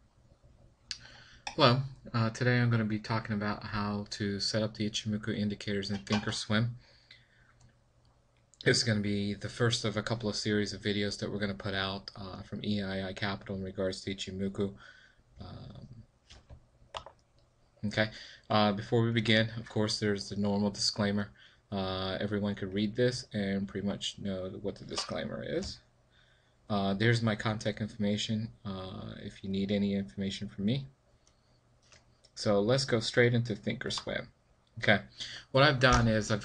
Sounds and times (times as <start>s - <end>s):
Speech: 0.9s - 6.8s, 8.6s - 14.8s, 15.4s - 16.0s, 17.8s - 25.9s, 26.7s - 31.0s, 32.4s - 36.4s.